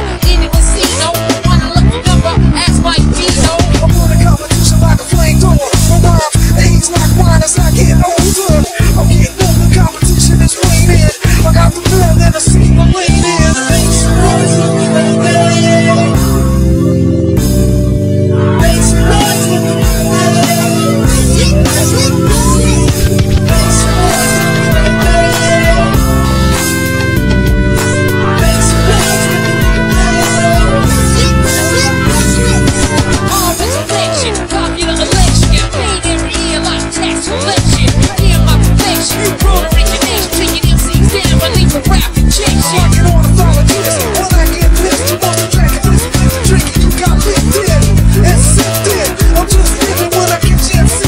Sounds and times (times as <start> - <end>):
Music: 0.0 - 51.0.